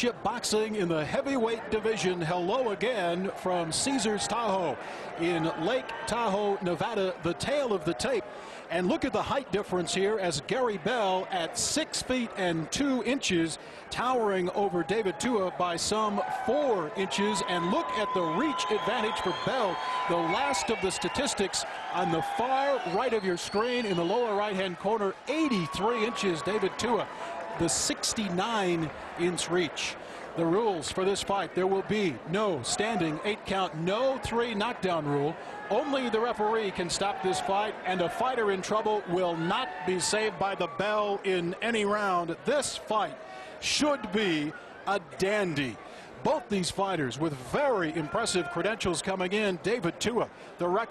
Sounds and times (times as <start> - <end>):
Speech: 0.0 - 50.9.